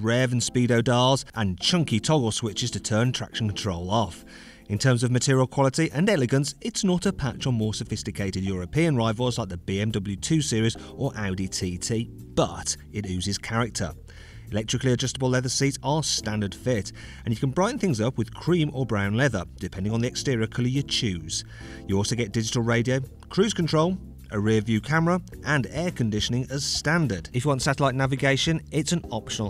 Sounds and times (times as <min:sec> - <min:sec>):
Music: 0:00.0 - 0:29.4
Speech: 0:00.0 - 0:29.4.